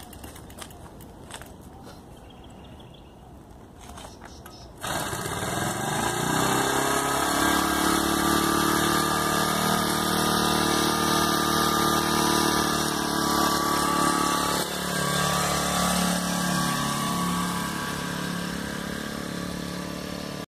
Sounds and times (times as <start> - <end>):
Vehicle: 0.0 - 20.4.